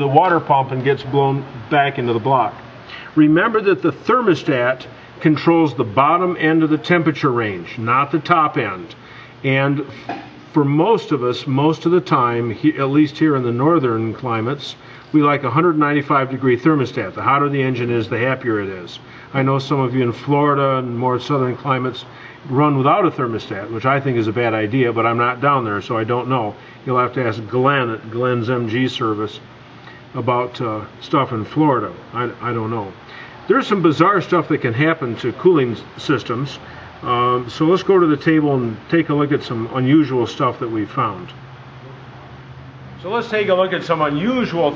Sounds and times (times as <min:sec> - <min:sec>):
Speech: 0:00.0 - 0:02.6, 0:03.2 - 0:29.5, 0:30.2 - 0:41.4, 0:43.0 - 0:44.7.